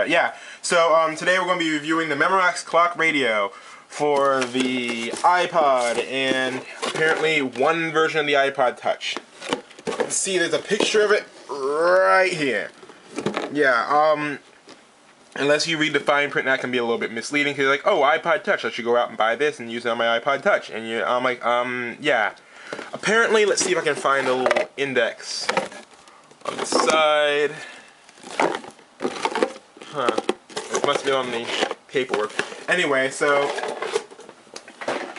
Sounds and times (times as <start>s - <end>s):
Speech: 0.0s - 9.2s, 10.0s - 12.8s, 13.5s - 14.4s, 15.4s - 25.8s, 26.5s - 27.7s, 29.9s - 33.6s.